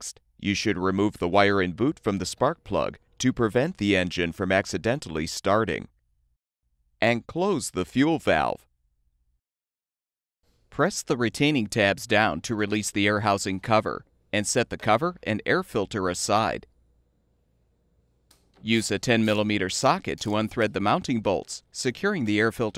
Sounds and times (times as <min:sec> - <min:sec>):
Speech: 0:00.0 - 0:05.9, 0:07.0 - 0:08.7, 0:10.8 - 0:16.7, 0:18.6 - 0:22.7.